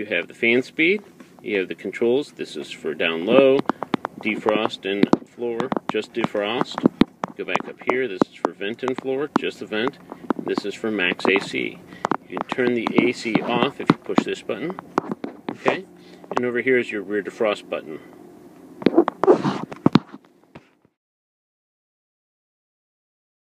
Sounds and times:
Speech: 0.0 - 3.6, 4.2 - 6.8, 7.4 - 14.8, 15.6 - 18.1.

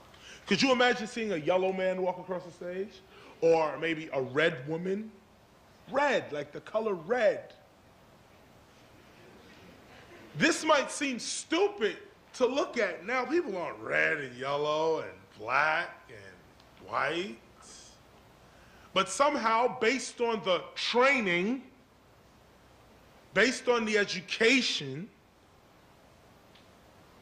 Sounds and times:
Narration, monologue: 0.0 - 27.0
Male speech, man speaking: 0.5 - 5.2, 5.9 - 7.6, 10.4 - 18.0, 19.0 - 21.8, 23.4 - 25.2.

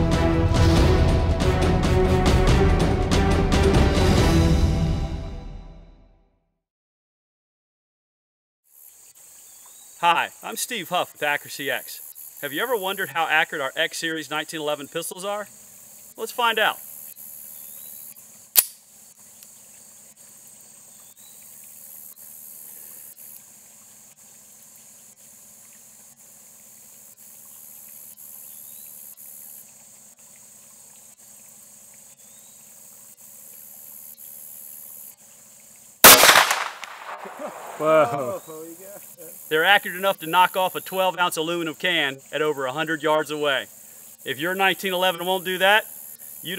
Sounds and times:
Outside, rural or natural: 0.0 - 6.4, 8.6 - 46.5.

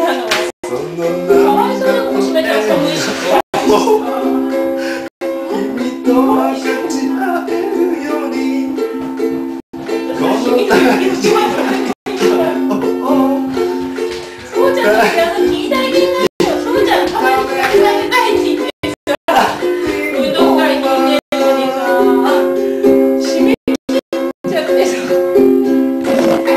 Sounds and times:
Ukulele: 0.0 - 26.5.

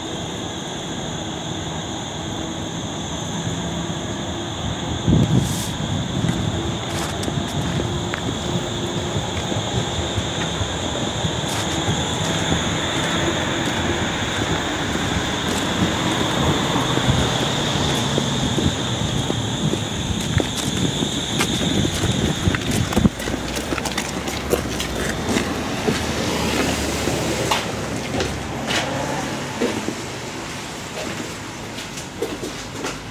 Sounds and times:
Vehicle: 0.0 - 33.1.

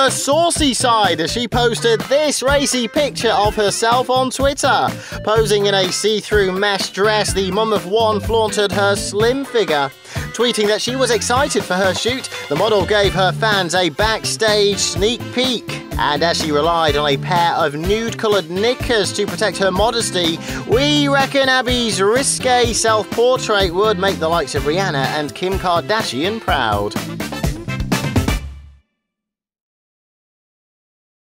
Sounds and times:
Speech: 0.0 - 27.0
Music: 0.0 - 29.3.

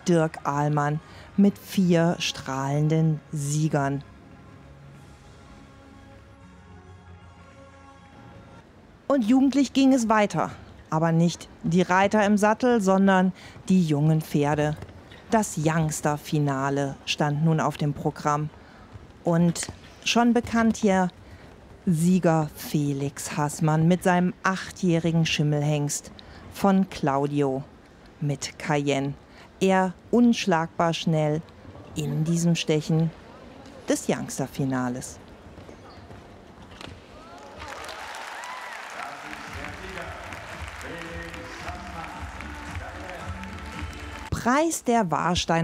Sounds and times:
Speech: 0.0 - 4.0, 9.1 - 18.5, 19.3 - 21.1, 21.9 - 31.4, 32.0 - 35.2, 44.3 - 45.6.

